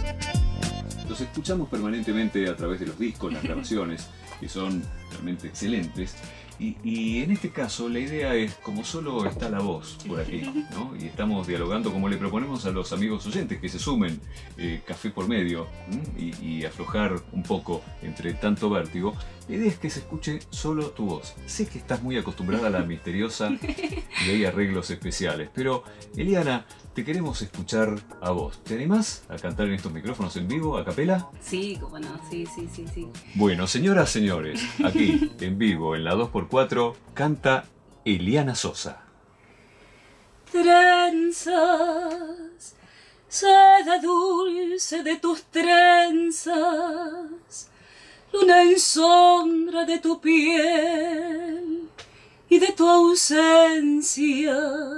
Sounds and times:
Music: 0:00.0 - 0:54.9
Speech: 0:01.1 - 0:23.6, 0:24.2 - 0:39.1.

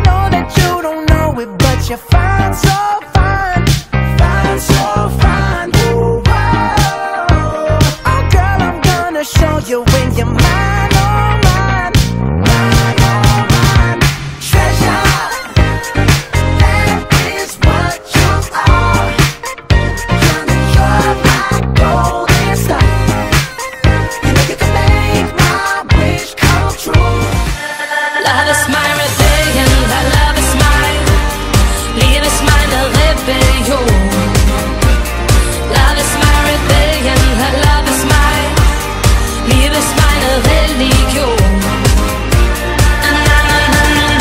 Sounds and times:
Music: 0:00.0 - 0:44.2.

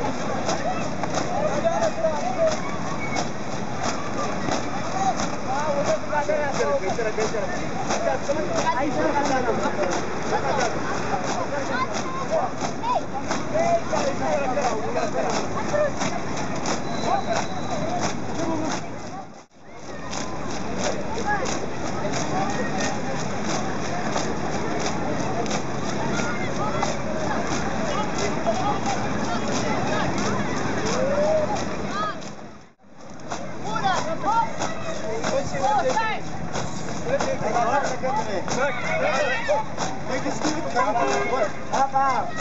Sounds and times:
Crowd: 0:00.0 - 0:42.4
Outside, urban or manmade: 0:00.0 - 0:42.4
Speech: 0:00.0 - 0:42.4.

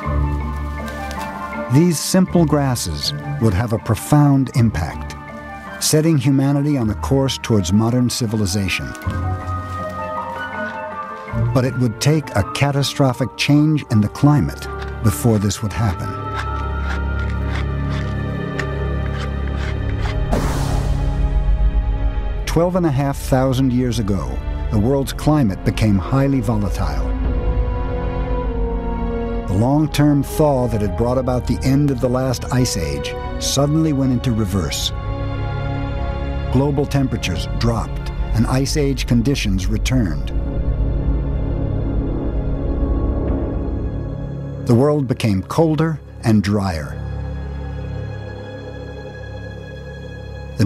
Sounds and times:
Music: 0:00.0 - 0:50.6
Speech: 0:01.7 - 0:05.2, 0:05.8 - 0:09.1, 0:11.4 - 0:16.2, 0:22.5 - 0:27.1, 0:29.5 - 0:34.9, 0:36.5 - 0:40.3, 0:44.7 - 0:47.0.

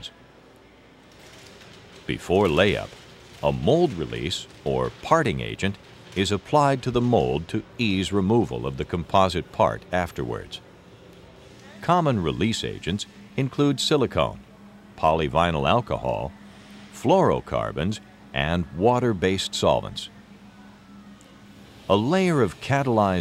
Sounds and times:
Speech: 0:02.1 - 0:10.6, 0:11.6 - 0:16.3, 0:17.0 - 0:20.2, 0:21.9 - 0:23.2.

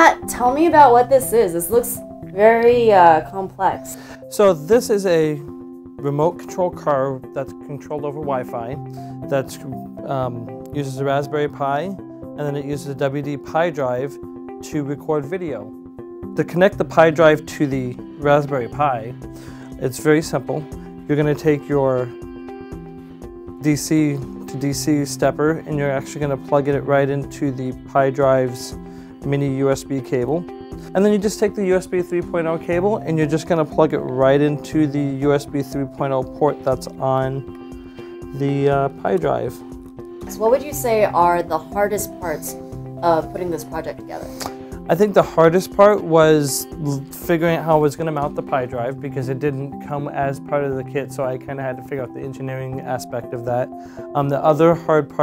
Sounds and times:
Music: 0:00.0 - 0:55.2.

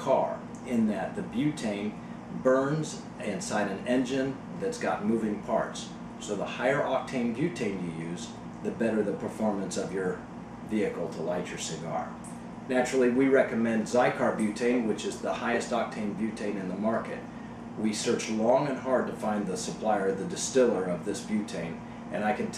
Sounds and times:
Speech: 0:00.0 - 0:22.5.

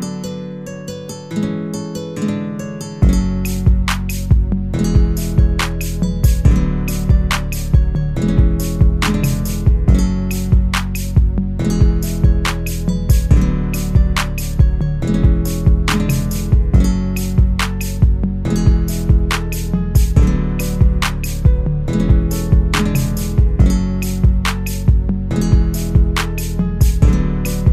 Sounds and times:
Acoustic guitar: 0:00.0 - 0:27.7
Strum: 0:00.0 - 0:27.7.

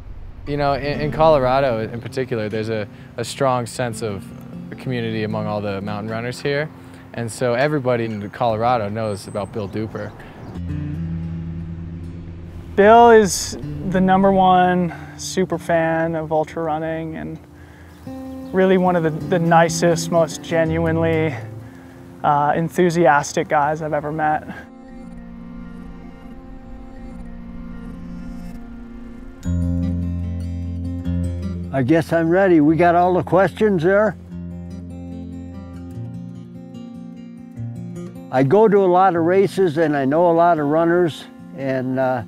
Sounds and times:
Music: 0:00.0 - 0:42.2
Outside, urban or manmade: 0:00.0 - 0:42.2
Speech: 0:00.5 - 0:10.2, 0:12.8 - 0:17.4, 0:18.5 - 0:21.5, 0:22.2 - 0:24.6, 0:31.7 - 0:34.2, 0:38.3 - 0:42.2.

